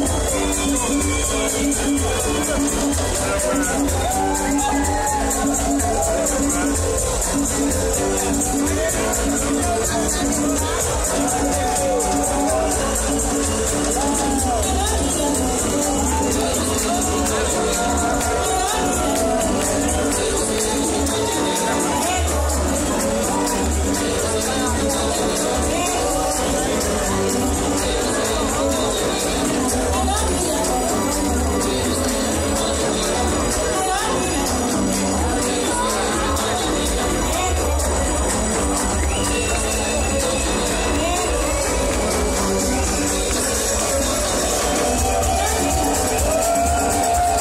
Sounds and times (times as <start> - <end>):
Music: 0.0 - 47.4
Speech: 0.0 - 47.4.